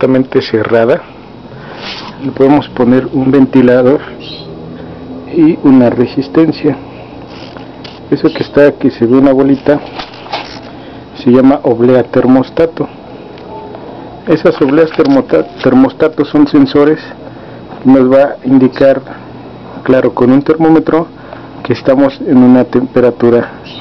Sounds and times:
Speech: 0.0s - 1.1s, 2.2s - 4.1s, 5.3s - 6.8s, 8.1s - 9.9s, 11.2s - 12.9s, 14.3s - 17.2s, 17.8s - 19.1s, 19.8s - 23.6s.

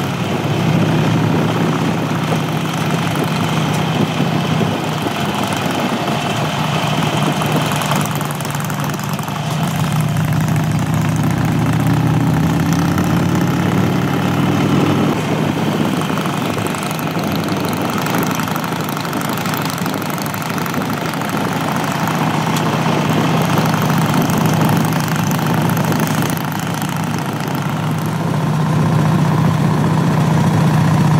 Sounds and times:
Motorcycle: 0.0s - 31.1s
Outside, rural or natural: 0.0s - 31.1s.

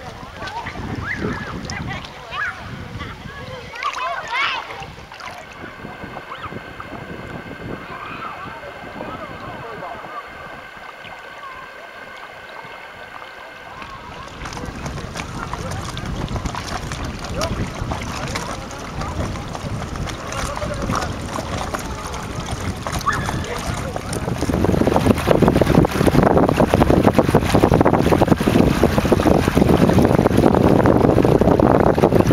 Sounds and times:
Speech: 0.0s - 6.4s, 7.8s - 10.6s, 11.2s - 24.5s
Rowboat, canoe, kayak: 0.0s - 32.3s
Sailboat, sailing ship: 0.0s - 32.3s.

